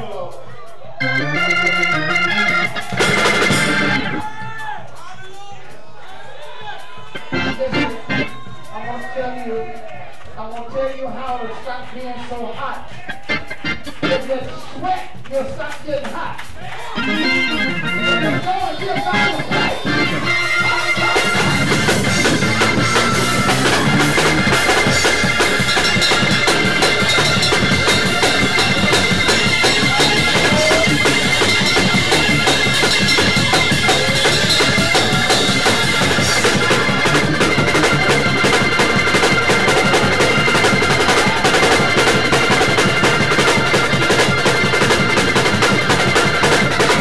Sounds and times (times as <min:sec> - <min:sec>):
Speech: 0:00.0 - 0:00.8, 0:05.0 - 0:21.8, 0:29.4 - 0:32.4
Funny music: 0:00.0 - 0:04.8, 0:06.1 - 0:09.6, 0:10.5 - 0:47.0.